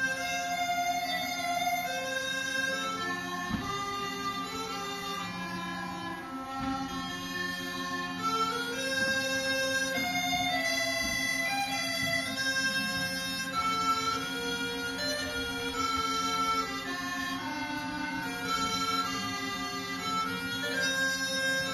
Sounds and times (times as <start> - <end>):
Bagpipes: 0.0 - 21.7.